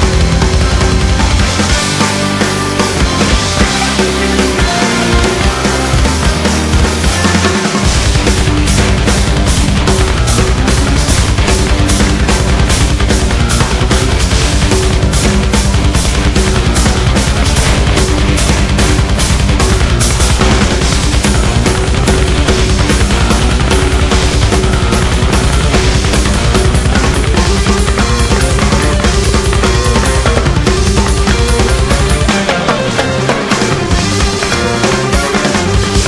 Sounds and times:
Music: 0.0 - 36.0.

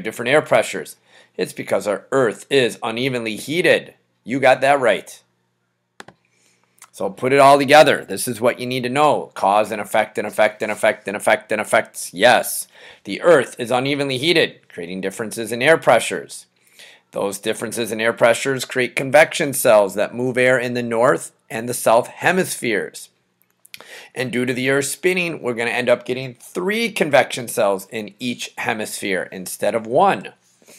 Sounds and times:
Speech: 0.0 - 5.3, 6.8 - 16.5, 17.1 - 23.2, 24.2 - 30.4.

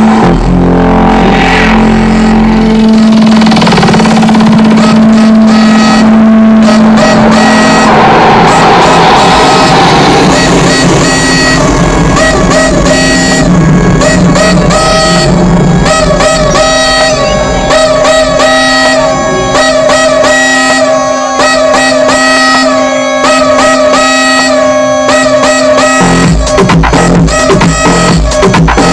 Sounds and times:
Music: 0.0 - 28.9.

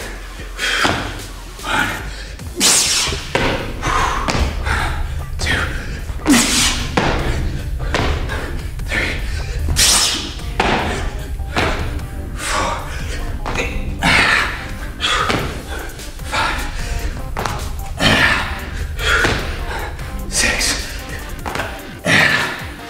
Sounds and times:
Music: 0.0 - 22.9.

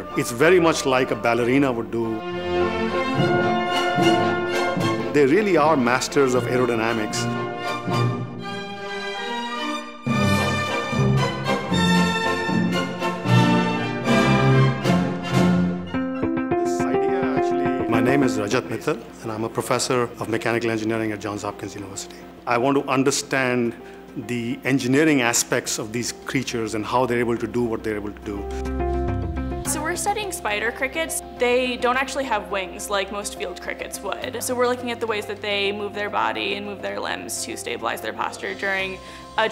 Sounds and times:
Music: 0.0 - 39.5
Speech: 16.7 - 28.6.

